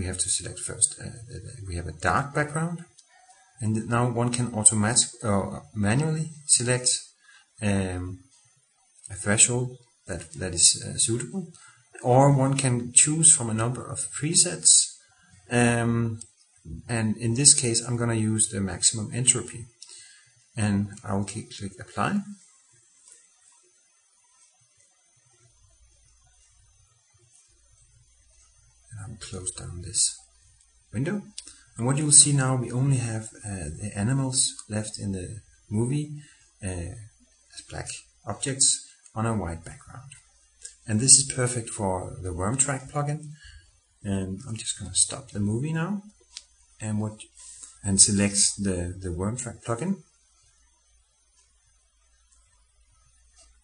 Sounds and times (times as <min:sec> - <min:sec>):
Speech: 0:00.0 - 0:02.9, 0:03.6 - 0:08.2, 0:09.1 - 0:19.8, 0:20.6 - 0:22.4, 0:28.9 - 0:30.2, 0:30.9 - 0:43.4, 0:44.0 - 0:46.1, 0:46.8 - 0:50.1.